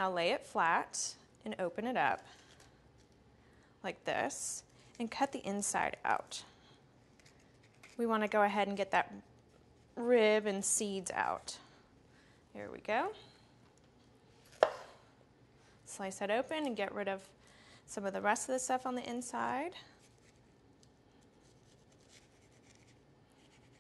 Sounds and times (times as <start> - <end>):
Speech: 3.9 - 6.4, 8.0 - 9.2, 10.0 - 11.6, 12.6 - 13.2, 15.9 - 17.3, 17.9 - 19.9.